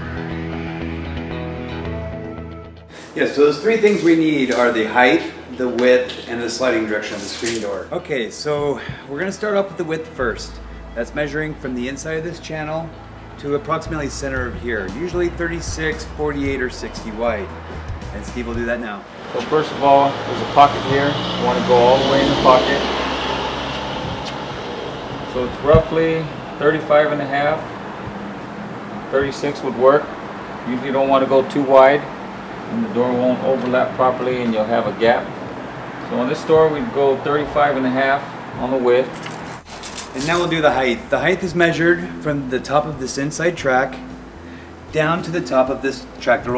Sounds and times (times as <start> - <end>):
Speech: 3.2 - 17.5, 18.2 - 22.9, 25.3 - 27.7, 29.1 - 30.1, 30.7 - 32.1, 32.7 - 35.3, 36.1 - 39.1, 40.2 - 44.0, 44.9 - 46.5.